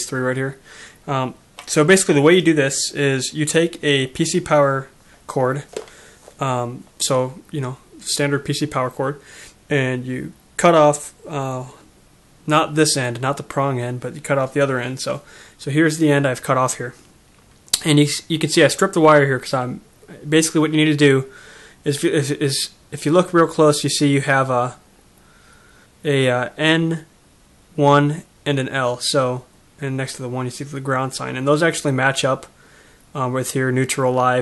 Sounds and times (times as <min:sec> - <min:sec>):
Speech: 0:00.0 - 0:05.8, 0:06.4 - 0:17.0, 0:17.7 - 0:24.8, 0:26.0 - 0:27.2, 0:27.8 - 0:34.4.